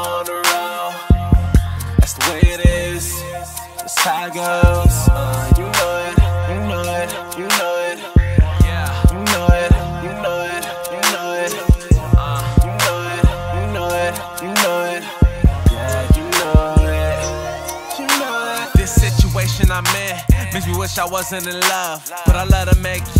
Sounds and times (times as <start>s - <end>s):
Music: 0.0s - 23.1s.